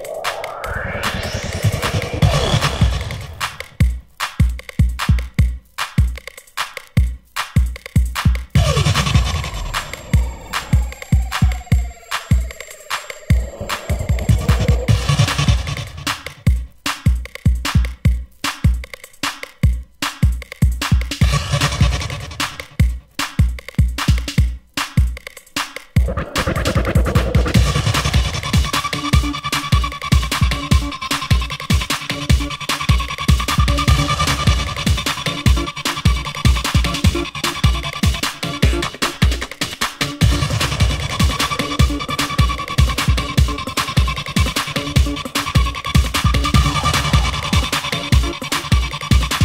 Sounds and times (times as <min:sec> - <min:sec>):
Techno: 0:00.0 - 0:25.2, 0:26.0 - 0:49.4.